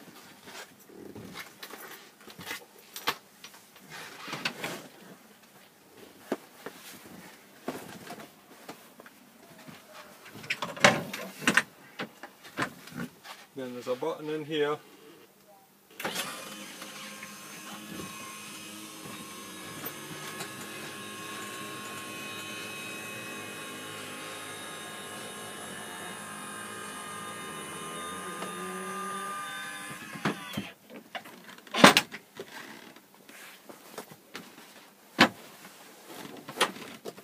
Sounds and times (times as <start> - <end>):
Speech: 13.6 - 15.7.